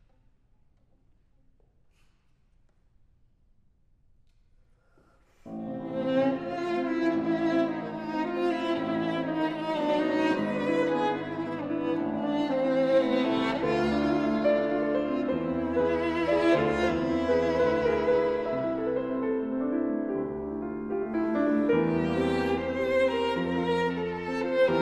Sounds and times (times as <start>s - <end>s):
Violin, fiddle: 5.5s - 20.0s, 21.1s - 24.8s.